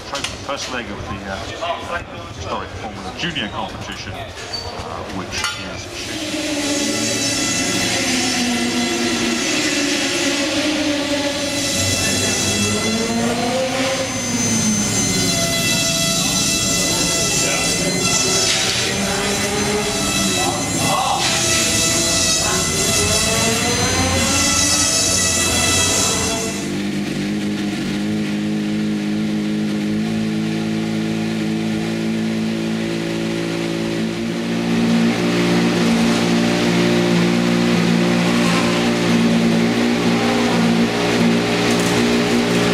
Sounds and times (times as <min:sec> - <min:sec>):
Car: 0:25.3 - 0:42.7.